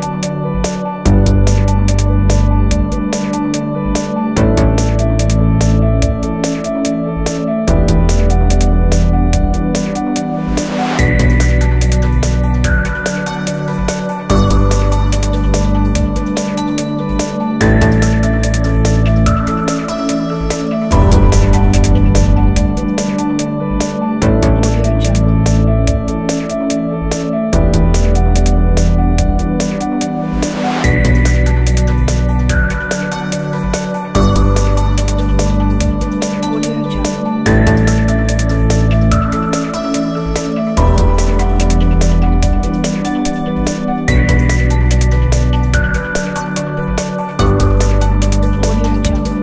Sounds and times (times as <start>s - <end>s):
Electronica: 0.0s - 49.4s.